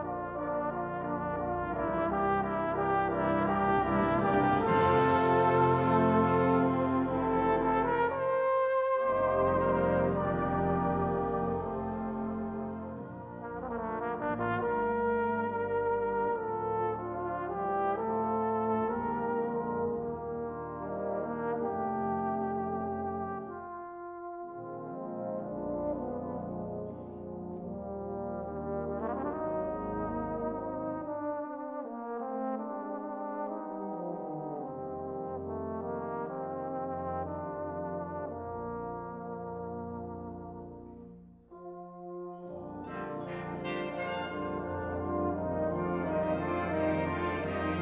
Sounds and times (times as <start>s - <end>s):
Trumpet: 0.0s - 47.8s.